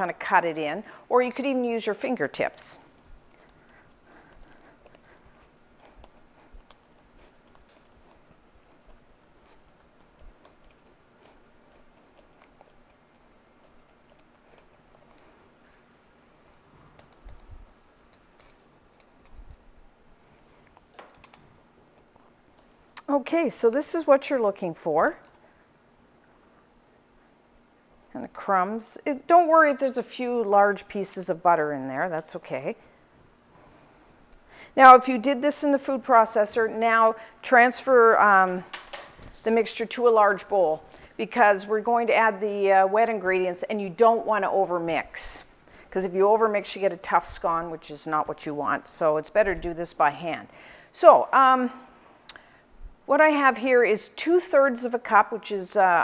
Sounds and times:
Inside, small room: 0:00.0 - 0:56.0.

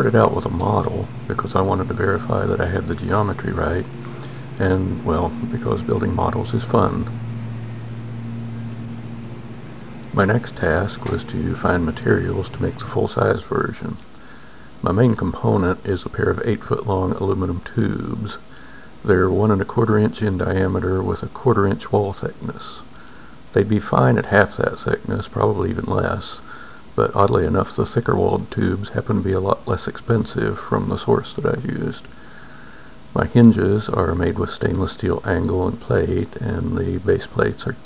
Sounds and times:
Speech: 0:00.0 - 0:07.2, 0:10.1 - 0:14.1, 0:14.8 - 0:32.2, 0:33.2 - 0:37.8.

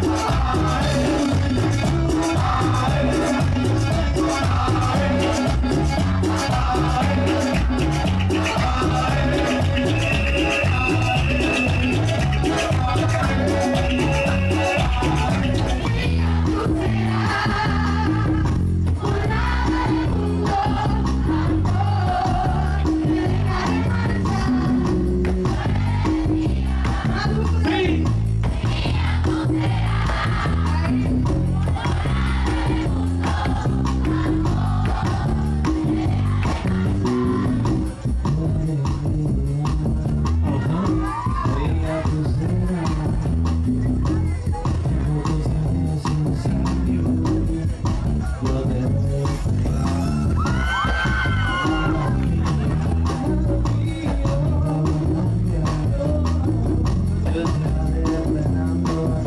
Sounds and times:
Music: 0:00.0 - 0:59.2.

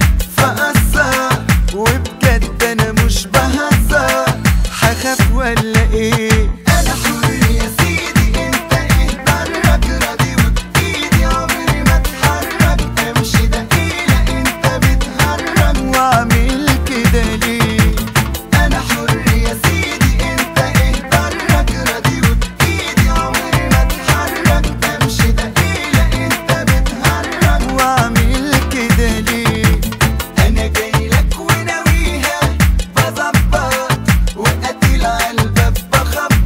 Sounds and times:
Afrobeat: 0:00.0 - 0:36.4.

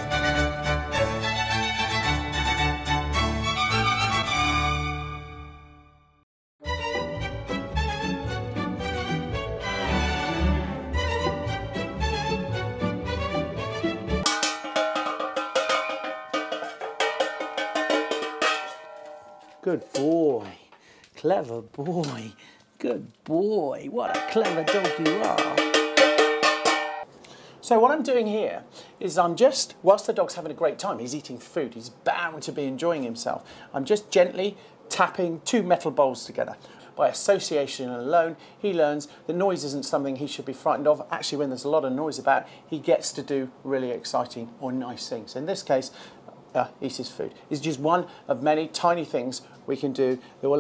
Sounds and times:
Speech: 0:19.6 - 0:25.6, 0:27.6 - 0:50.6.

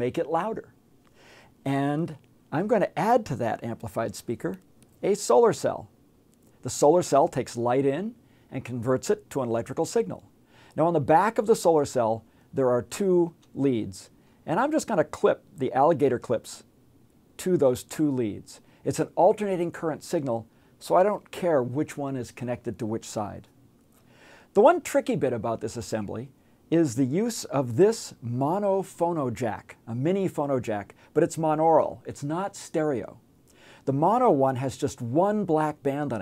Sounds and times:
Speech: 0:00.0 - 0:00.8, 0:01.6 - 0:05.9, 0:06.6 - 0:16.7, 0:17.4 - 0:23.5, 0:24.6 - 0:33.2, 0:33.9 - 0:36.2.

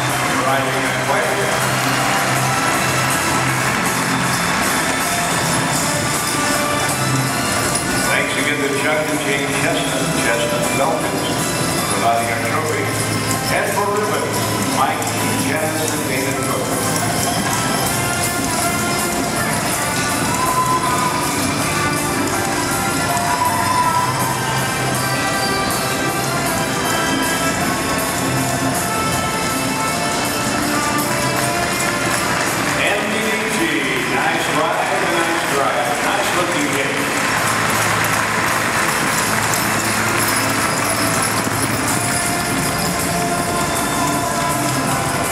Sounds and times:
Clip-clop: 0:00.0 - 0:45.3
Music: 0:00.0 - 0:45.3
Speech: 0:00.2 - 0:01.6, 0:08.1 - 0:16.8, 0:32.8 - 0:37.1.

